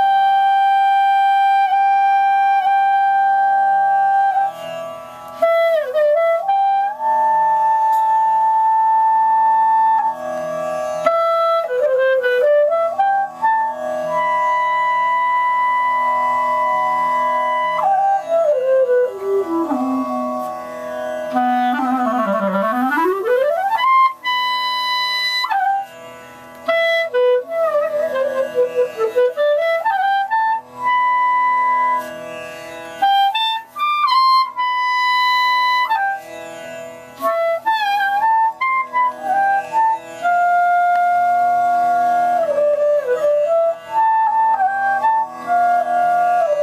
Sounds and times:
Clarinet: 0.0 - 46.6
Inside, small room: 0.0 - 46.6.

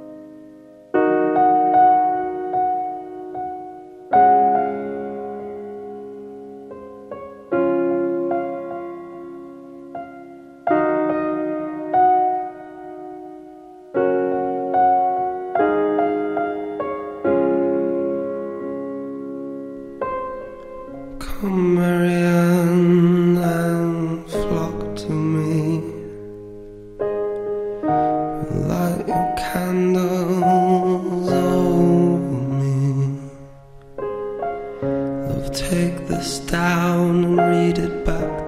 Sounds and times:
Music: 0.0 - 38.4.

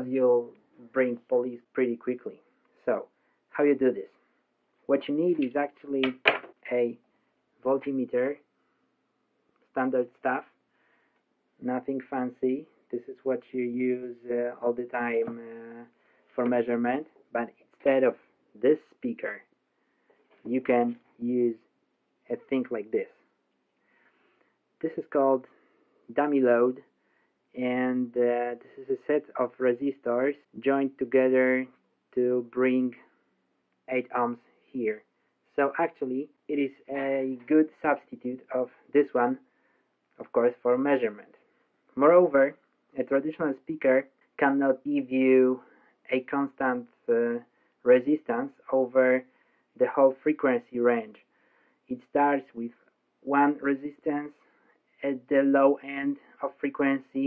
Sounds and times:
Speech: 0.0 - 4.2, 4.9 - 7.0, 7.6 - 8.5, 9.7 - 10.6, 11.6 - 19.5, 20.3 - 21.7, 22.3 - 23.3, 24.8 - 26.9, 27.5 - 33.2, 33.9 - 39.5, 40.2 - 51.3, 51.9 - 57.2.

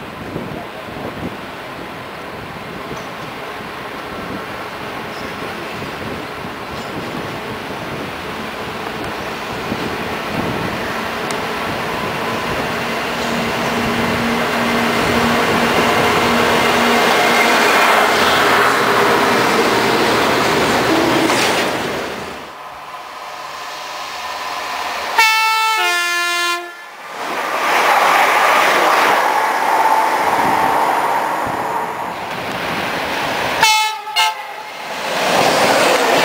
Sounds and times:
Railroad car, train wagon: 0.0 - 36.2
Train horn: 25.1 - 27.0, 33.6 - 34.8.

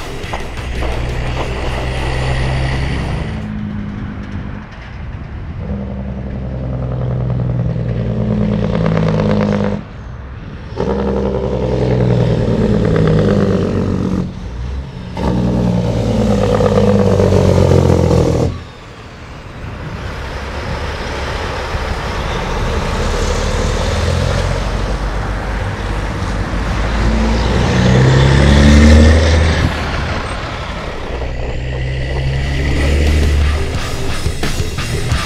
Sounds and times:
Outside, rural or natural: 0.0 - 35.2
Truck: 0.0 - 35.2.

